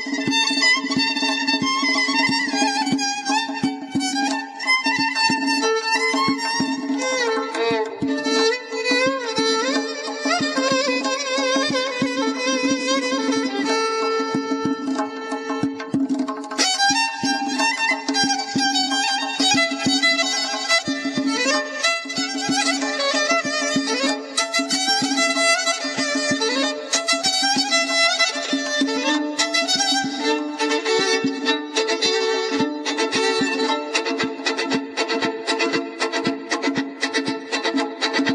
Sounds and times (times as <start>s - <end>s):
Traditional music: 0.0s - 38.3s
Violin, fiddle: 0.0s - 38.3s.